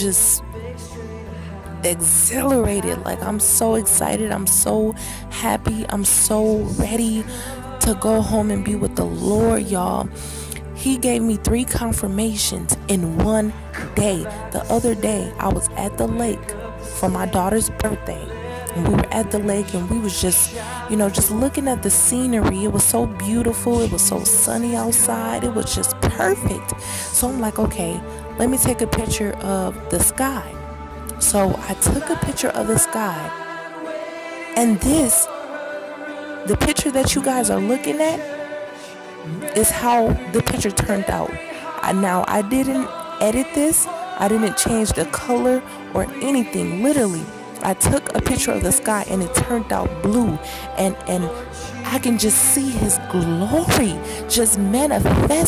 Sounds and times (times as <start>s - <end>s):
Speech: 0.0s - 0.5s, 1.8s - 33.4s, 34.6s - 35.4s, 36.5s - 38.3s, 39.3s - 55.4s.